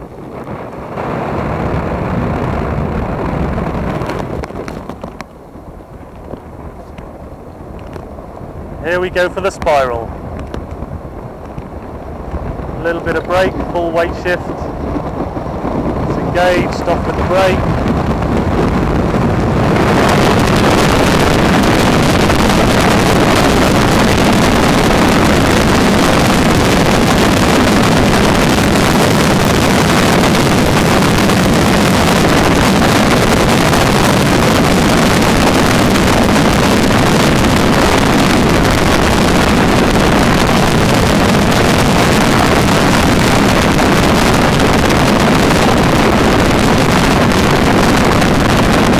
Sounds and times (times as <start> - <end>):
Speech: 8.8 - 10.1, 12.8 - 14.5, 16.1 - 17.6.